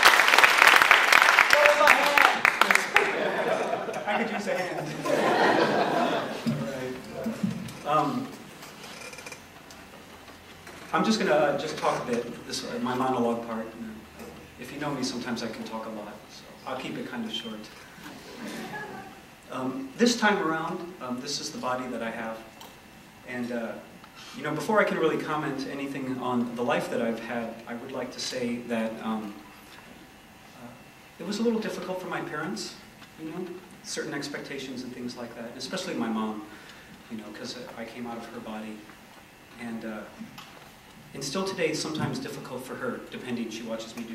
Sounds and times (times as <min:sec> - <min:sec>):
Narration, monologue: 0:01.3 - 0:44.1
Male speech, man speaking: 0:01.5 - 0:03.0, 0:04.0 - 0:05.0, 0:06.5 - 0:08.4, 0:10.9 - 0:14.0, 0:14.6 - 0:17.8, 0:19.5 - 0:22.5, 0:23.3 - 0:23.8, 0:24.4 - 0:29.4, 0:30.6 - 0:36.5, 0:37.1 - 0:38.9, 0:39.6 - 0:40.2, 0:41.2 - 0:44.1.